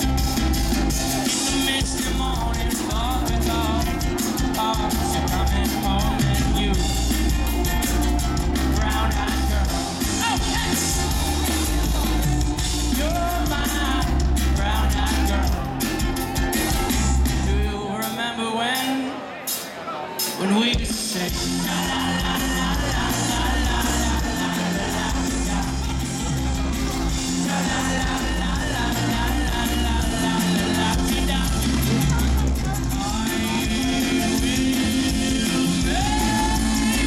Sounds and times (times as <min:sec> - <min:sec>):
Music: 0:00.0 - 0:37.0.